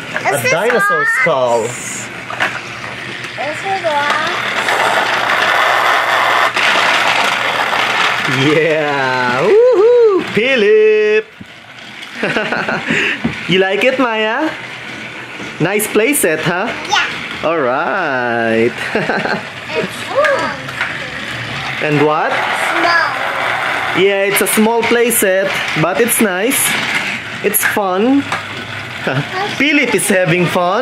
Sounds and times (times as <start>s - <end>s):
Child speech, kid speaking: 0.2s - 1.9s, 3.4s - 4.5s, 16.7s - 17.2s, 19.7s - 21.6s, 22.6s - 23.5s, 29.2s - 30.5s.